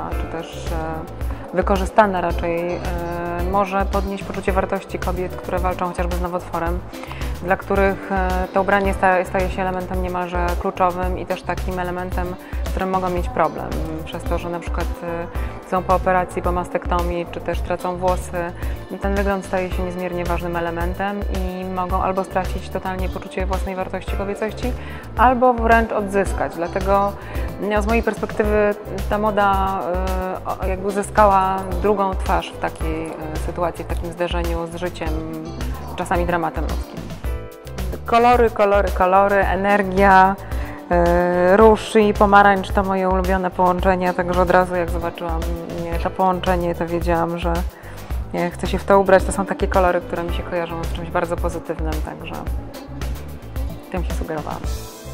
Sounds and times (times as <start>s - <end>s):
Speech: 0.0s - 6.8s, 7.4s - 36.9s, 38.0s - 47.7s, 48.4s - 52.5s, 53.9s - 54.7s
Music: 0.0s - 55.1s.